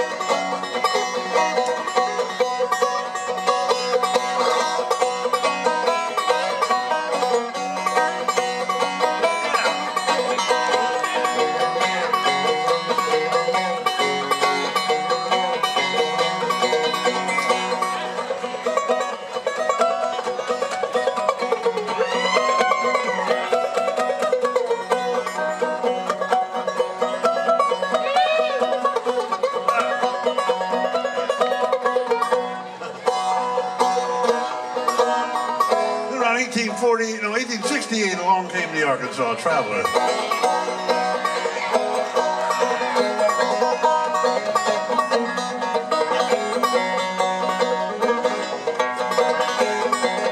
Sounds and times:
Banjo: 0.0s - 50.3s
Country: 0.0s - 50.3s.

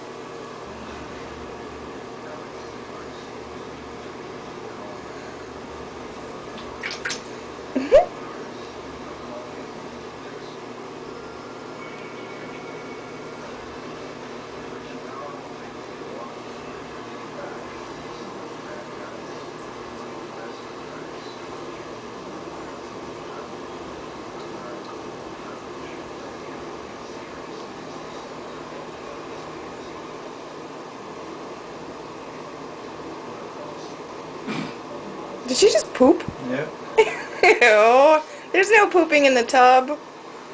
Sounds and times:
Speech: 0.8s - 5.6s, 8.2s - 10.8s, 14.1s - 30.1s, 37.5s - 40.0s.

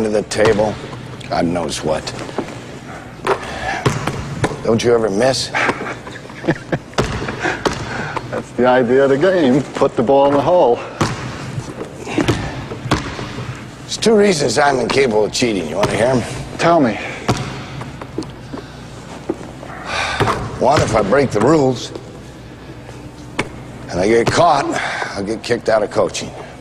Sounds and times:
Inside, large room or hall: 0.0s - 26.6s
Basketball bounce: 3.8s - 4.6s, 12.2s - 13.3s.

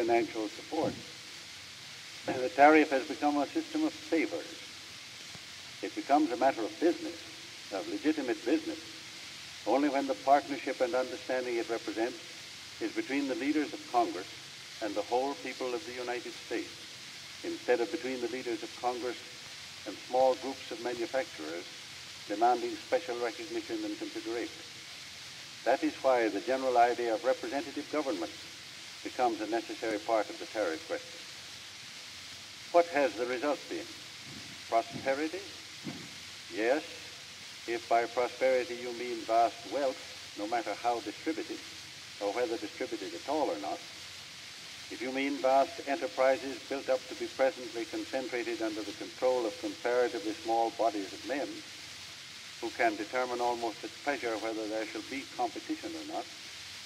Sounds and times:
Male speech, man speaking: 0.0s - 1.0s, 2.3s - 4.6s, 5.8s - 7.2s, 7.8s - 8.8s, 9.7s - 12.2s, 12.8s - 16.7s, 17.4s - 19.2s, 19.9s - 21.7s, 22.3s - 24.5s, 25.7s - 28.3s, 29.1s - 31.0s, 32.8s - 33.9s, 34.7s - 35.5s, 36.5s - 37.0s, 37.7s - 41.6s, 42.2s - 43.8s, 44.9s - 51.6s, 52.6s - 56.3s
Narration, monologue: 0.0s - 56.8s
Speech synthesizer: 2.3s - 4.4s, 9.7s - 12.1s, 14.8s - 16.6s, 19.9s - 21.6s, 22.3s - 24.5s, 25.7s - 28.3s, 32.8s - 33.8s, 36.6s - 36.8s, 37.7s - 41.6s, 42.2s - 43.8s, 45.0s - 51.5s, 52.7s - 56.2s.

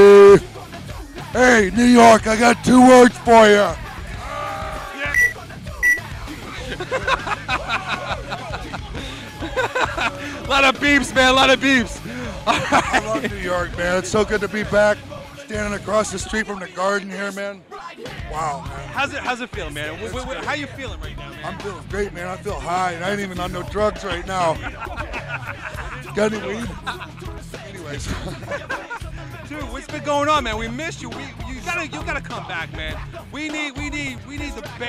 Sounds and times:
Music: 0.0s - 34.8s
Speech: 1.3s - 3.8s, 10.4s - 24.7s, 26.0s - 26.9s, 27.6s - 28.3s, 29.5s - 34.8s.

